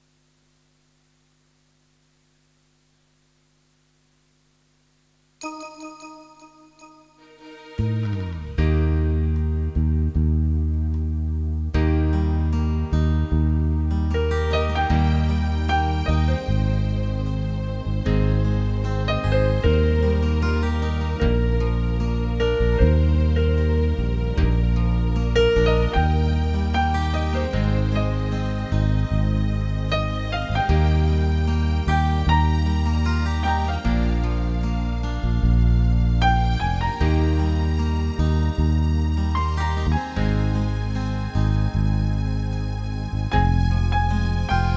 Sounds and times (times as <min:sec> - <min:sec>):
Music: 0:05.4 - 0:44.7.